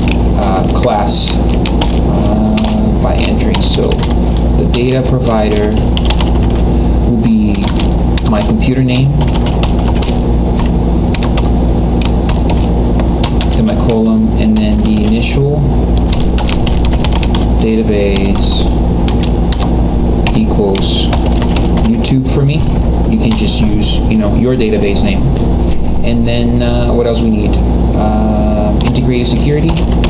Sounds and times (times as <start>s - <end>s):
Typing: 0.0s - 6.6s, 7.4s - 15.2s, 16.1s - 18.4s, 19.1s - 22.1s, 28.8s - 30.1s
Speech: 0.4s - 1.4s, 2.1s - 4.0s, 4.6s - 5.8s, 7.1s - 9.3s, 13.5s - 15.7s, 17.6s - 18.7s, 20.3s - 21.2s, 21.9s - 25.4s, 26.0s - 29.8s.